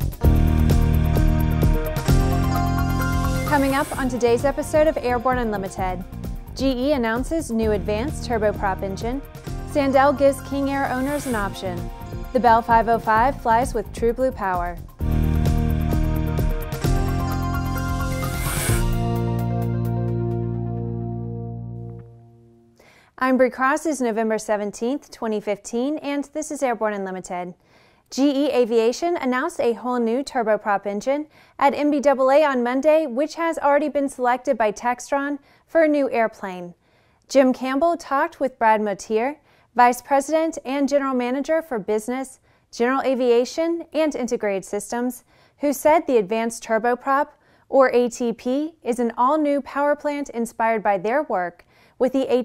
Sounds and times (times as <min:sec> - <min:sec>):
Music: 0:00.0 - 0:22.8
Speech: 0:03.5 - 0:06.0, 0:06.6 - 0:14.8, 0:23.2 - 0:52.4.